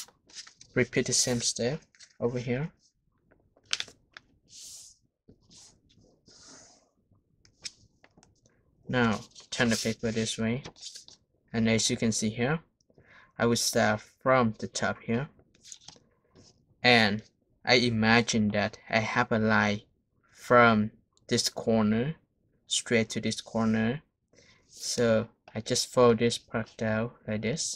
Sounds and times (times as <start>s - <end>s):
Speech: 0.8s - 2.8s, 8.9s - 10.7s, 11.6s - 12.7s, 13.4s - 15.3s, 16.8s - 24.1s, 24.8s - 27.7s.